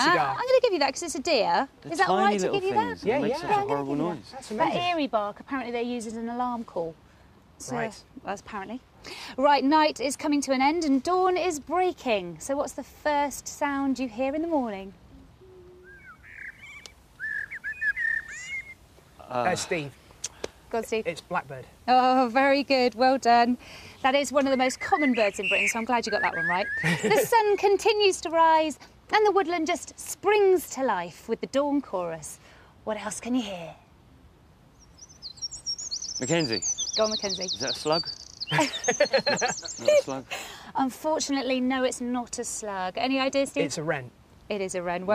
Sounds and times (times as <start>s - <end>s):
Outside, rural or natural: 0.0s - 45.1s.